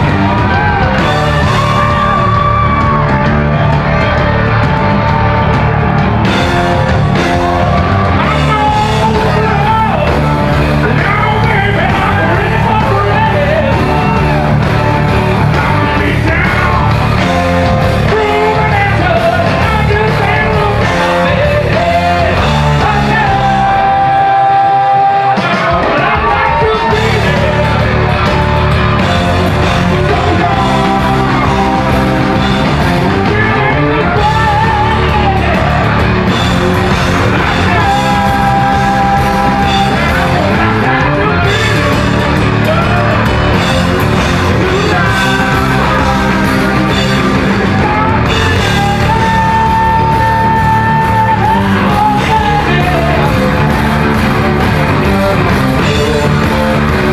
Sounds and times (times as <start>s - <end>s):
Music: 0.0s - 57.1s.